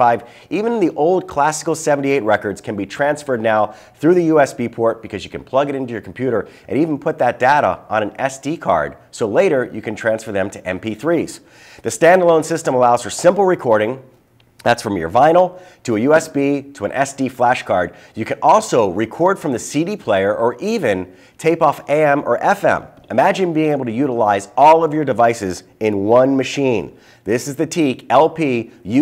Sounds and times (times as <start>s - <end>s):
Speech: 0.0s - 29.0s.